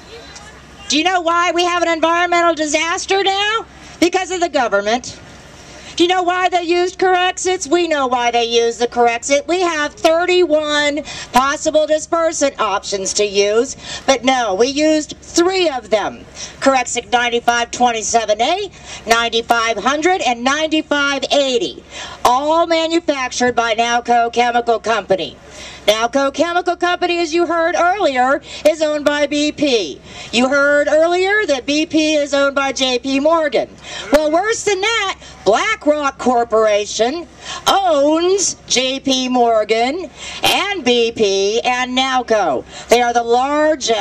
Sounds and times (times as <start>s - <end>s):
Female speech, woman speaking: 0.1s - 5.2s, 6.0s - 44.0s
Narration, monologue: 0.3s - 44.0s.